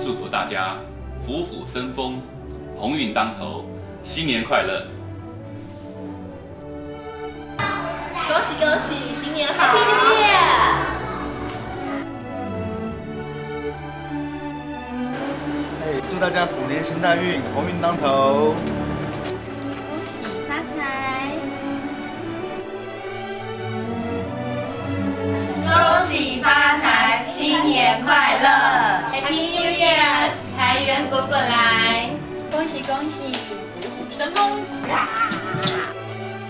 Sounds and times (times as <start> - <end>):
Music: 0.0 - 36.4.